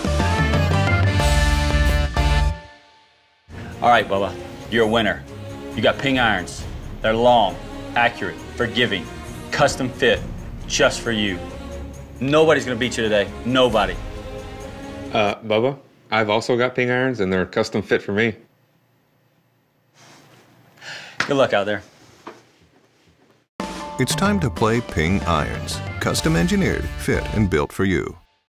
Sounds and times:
Music: 0.0 - 15.4, 23.6 - 28.5
Speech: 3.8 - 5.2, 5.8 - 11.4, 12.2 - 14.0, 15.2 - 18.5, 21.3 - 21.9, 24.0 - 28.3.

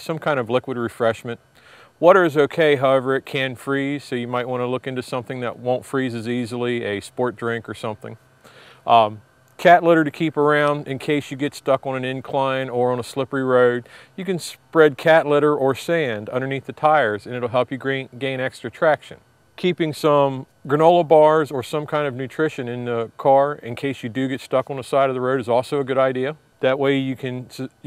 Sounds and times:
Speech: 0.0 - 1.4, 2.0 - 8.2, 8.9 - 27.8.

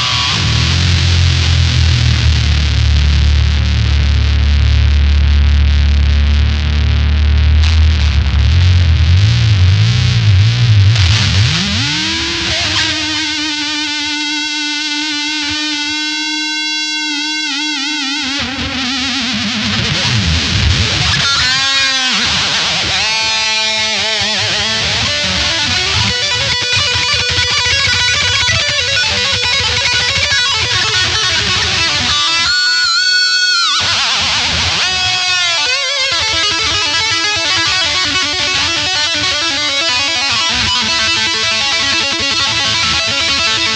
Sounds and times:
Guitar: 0.0 - 43.7.

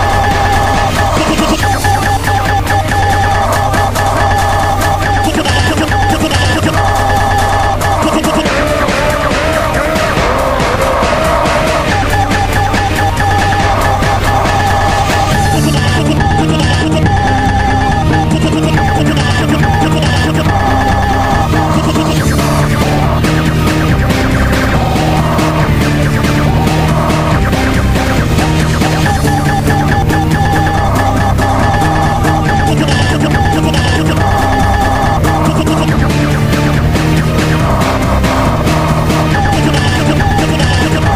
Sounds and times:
Techno: 0.0 - 41.1.

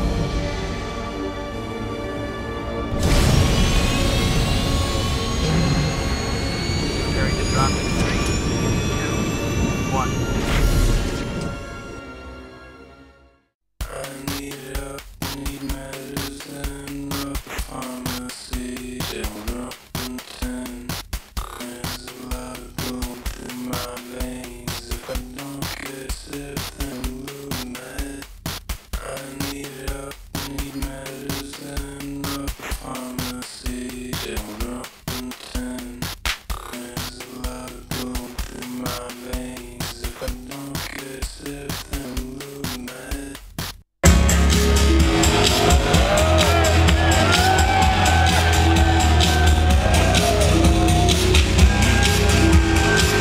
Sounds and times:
Music: 0.0 - 53.2
Sound effect: 2.9 - 11.8, 13.8 - 43.4.

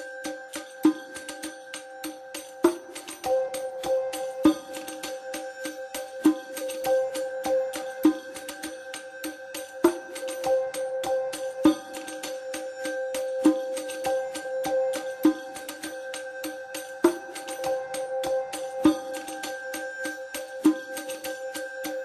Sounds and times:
Music: 0.0 - 22.0.

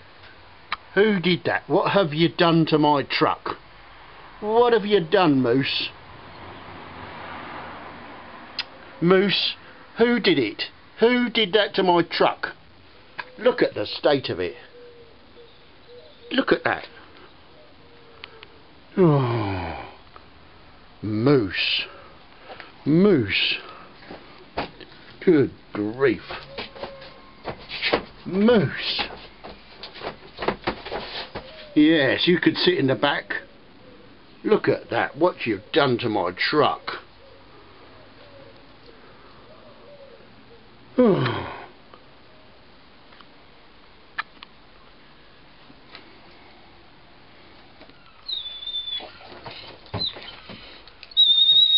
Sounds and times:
Speech: 0.9 - 3.6, 4.4 - 6.0, 9.0 - 12.6, 13.4 - 14.7, 16.3 - 17.0, 21.0 - 22.0, 22.8 - 23.7, 25.2 - 26.5, 28.2 - 29.2, 31.8 - 33.5, 34.4 - 37.1.

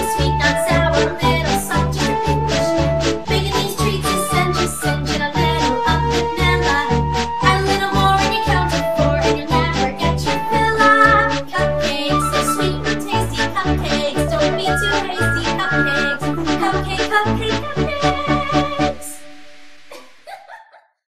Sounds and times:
Happy music: 0.0 - 19.7
Dance music: 0.0 - 20.2.

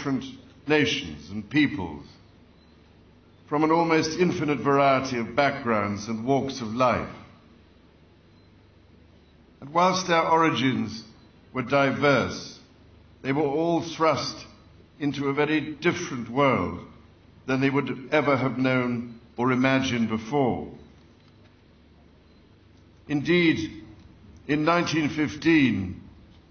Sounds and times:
Speech: 0.0 - 2.2, 3.5 - 7.4, 9.6 - 20.8, 23.1 - 26.1.

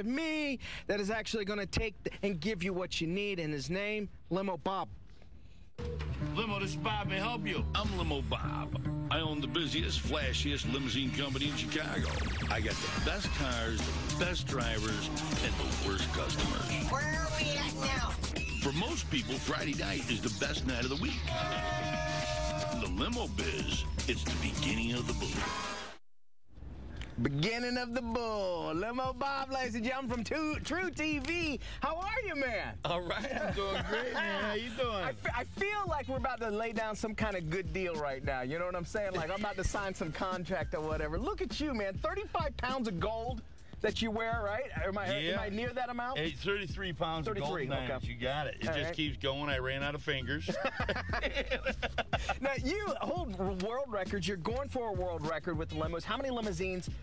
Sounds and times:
Speech: 6.4 - 21.3, 22.8 - 25.3, 27.2 - 50.6, 52.2 - 56.9.

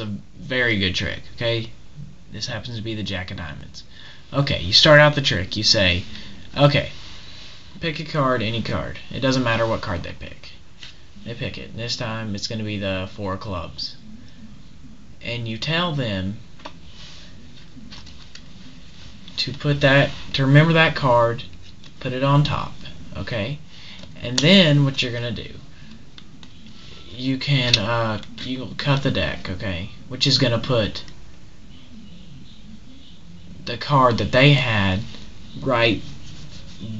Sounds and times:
Speech: 0.0 - 7.0, 7.8 - 10.6, 11.2 - 14.0, 15.2 - 16.4, 19.4 - 23.6, 24.2 - 25.7, 27.1 - 31.2, 33.0 - 36.1.

